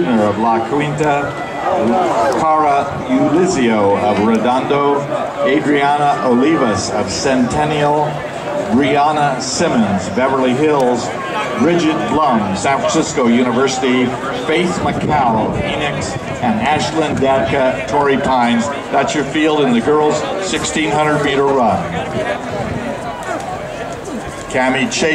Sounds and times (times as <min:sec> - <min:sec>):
Outside, urban or manmade: 0:00.0 - 0:25.1
Run: 0:00.0 - 0:25.1
Speech: 0:00.0 - 0:25.1.